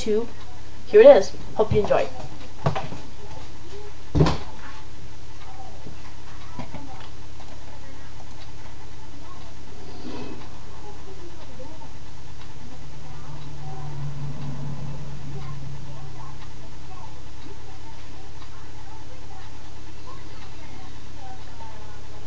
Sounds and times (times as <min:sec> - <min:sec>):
Speech: 0:00.0 - 0:02.4, 0:03.0 - 0:22.2.